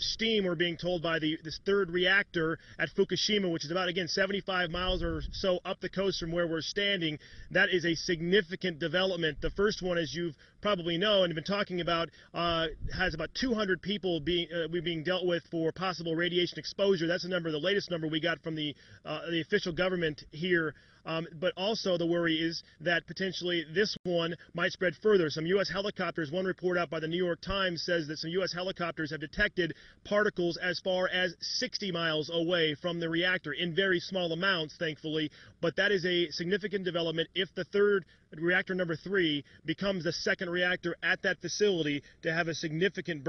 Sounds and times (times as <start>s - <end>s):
Speech: 0.0s - 43.2s.